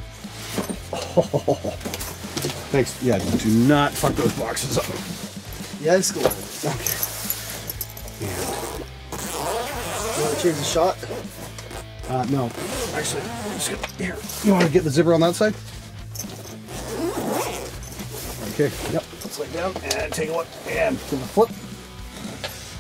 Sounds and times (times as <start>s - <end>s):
Guitar: 0.0s - 22.8s.